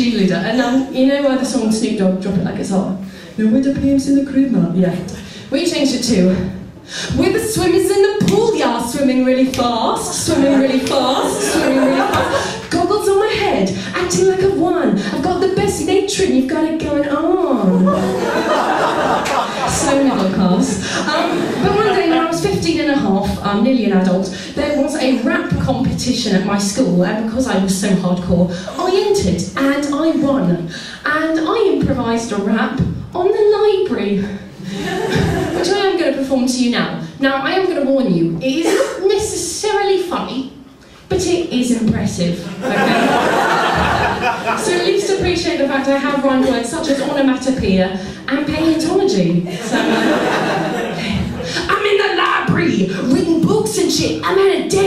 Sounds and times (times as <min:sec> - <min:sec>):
Speech: 0:00.0 - 0:18.0, 0:19.6 - 0:34.5, 0:35.6 - 0:43.0, 0:44.5 - 0:49.5, 0:51.2 - 0:54.8.